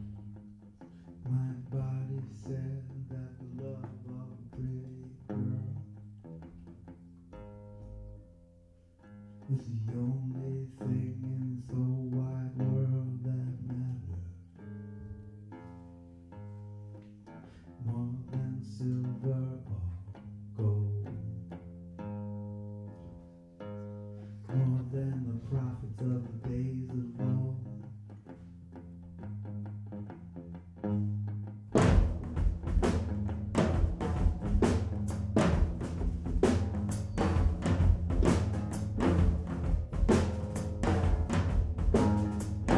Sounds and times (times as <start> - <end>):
Music: 0.0 - 42.7.